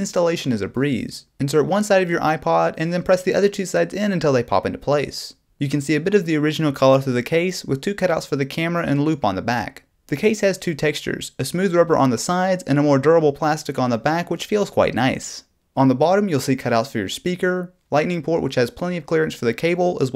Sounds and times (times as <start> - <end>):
Speech: 0.0 - 20.1.